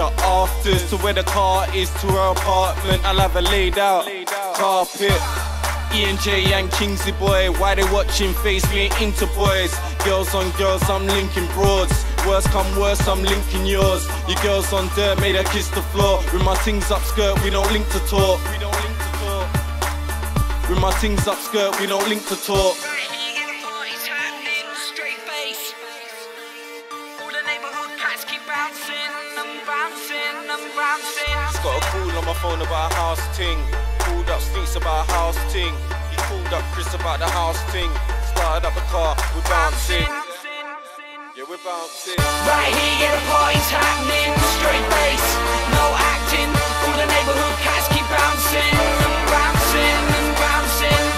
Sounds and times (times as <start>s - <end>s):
Rapping: 0.0s - 26.2s, 27.3s - 51.1s
Hip hop music: 0.0s - 51.1s.